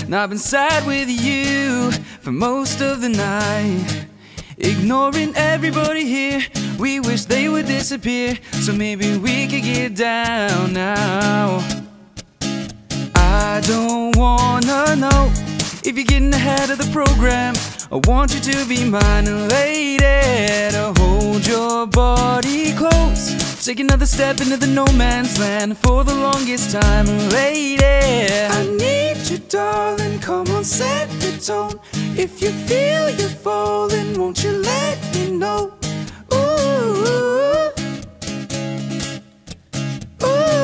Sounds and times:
Blues: 0.0s - 40.6s
Rhythm and blues: 4.6s - 39.2s, 39.8s - 40.6s.

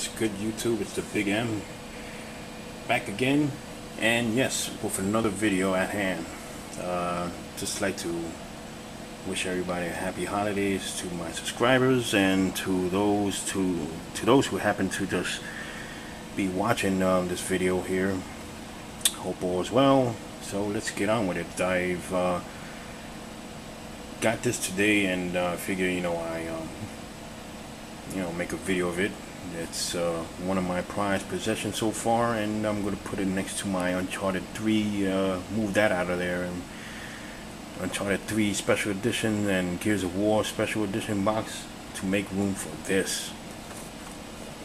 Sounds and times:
Speech: 0.0s - 1.7s, 2.9s - 8.4s, 9.2s - 15.5s, 16.4s - 18.3s, 19.0s - 22.5s, 24.2s - 26.9s, 28.1s - 36.7s, 37.8s - 43.4s.

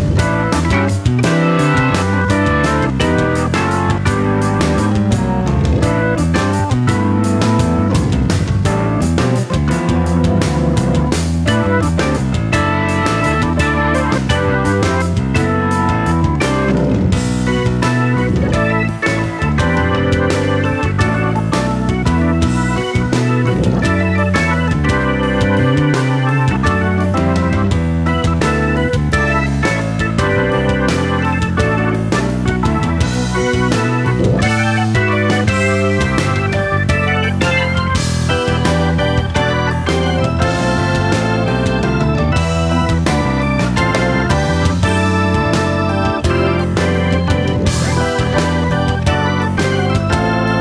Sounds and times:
Music: 0.0s - 50.6s.

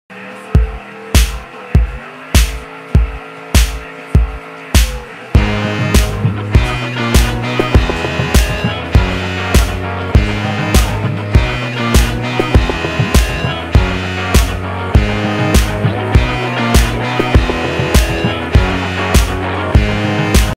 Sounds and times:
Music: 0.1s - 20.5s.

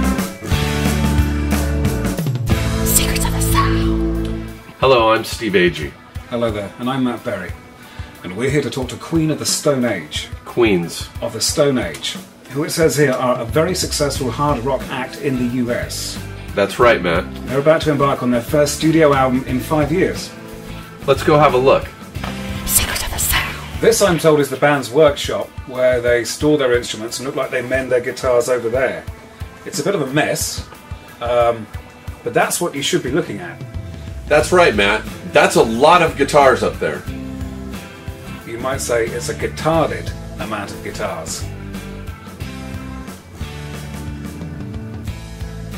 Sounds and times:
Music: 0.0s - 45.7s
Speech: 2.9s - 4.0s, 4.8s - 7.6s, 8.2s - 20.3s, 21.0s - 21.9s, 22.7s - 33.6s, 34.3s - 37.1s, 38.4s - 41.5s.

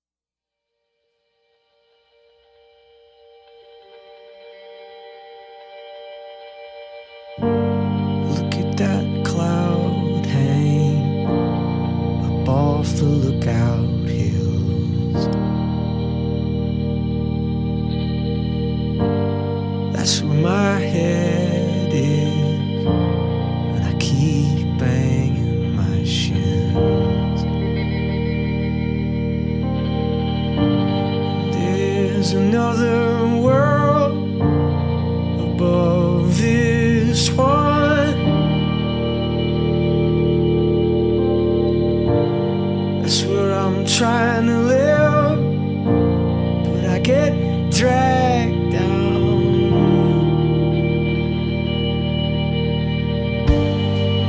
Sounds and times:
Music: 0.6s - 54.2s.

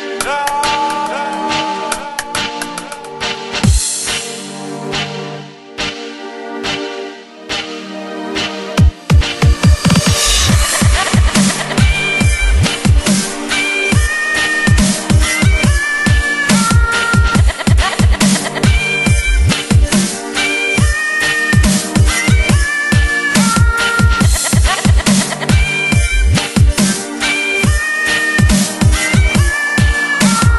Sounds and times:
Dubstep: 0.0s - 5.1s, 8.8s - 30.5s.

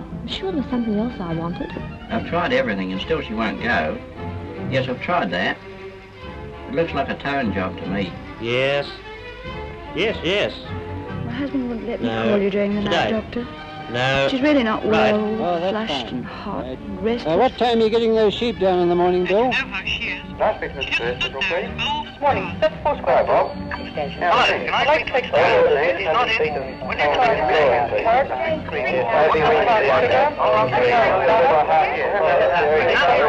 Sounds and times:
Music: 0.0s - 33.2s
Speech: 11.3s - 19.2s, 19.9s - 33.2s.

